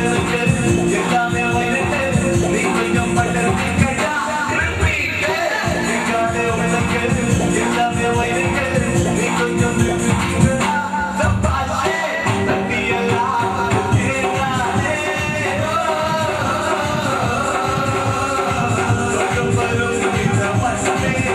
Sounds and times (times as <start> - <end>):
Male singing: 0.0 - 21.3
Music: 0.0 - 21.3.